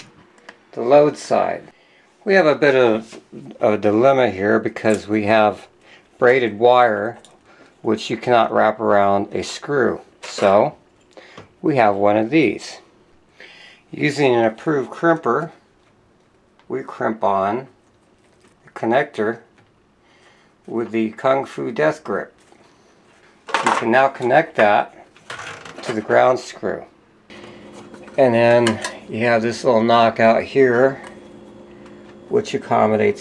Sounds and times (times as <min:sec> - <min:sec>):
Inside, small room: 0:00.0 - 0:33.2
Speech: 0:00.7 - 0:07.2, 0:07.8 - 0:10.8, 0:11.6 - 0:12.9, 0:13.9 - 0:15.6, 0:16.7 - 0:17.8, 0:18.6 - 0:19.5, 0:20.7 - 0:22.4, 0:23.6 - 0:25.0, 0:25.8 - 0:27.0, 0:28.2 - 0:31.1, 0:32.3 - 0:33.2.